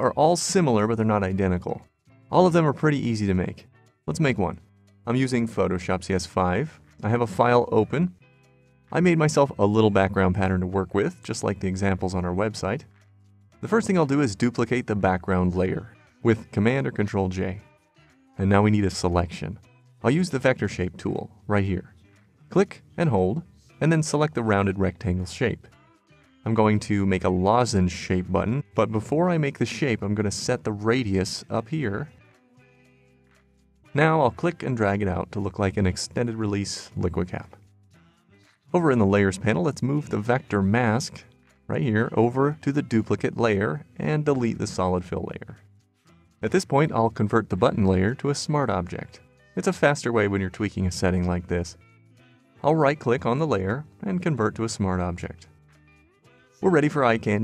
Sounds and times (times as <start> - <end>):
Speech: 0.0 - 8.2, 8.9 - 12.9, 13.6 - 17.6, 18.4 - 25.7, 26.4 - 32.1, 33.9 - 37.6, 38.7 - 45.6, 46.4 - 51.8, 52.6 - 55.5, 56.6 - 57.4
Music: 0.0 - 57.4.